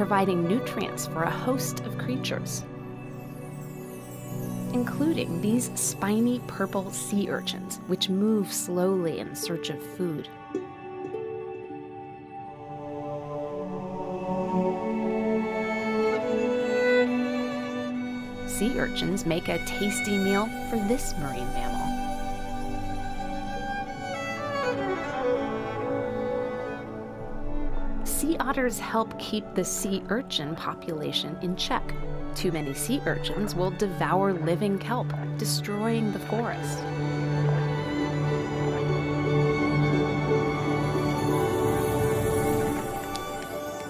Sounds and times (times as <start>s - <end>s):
String section: 0.0s - 43.8s.